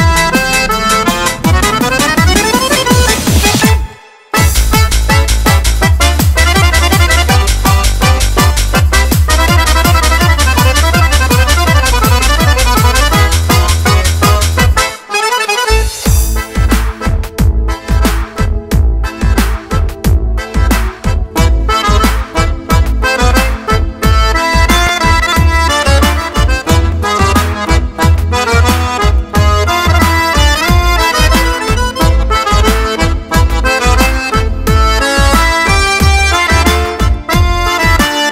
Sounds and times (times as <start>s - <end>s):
Music: 0.0s - 38.3s.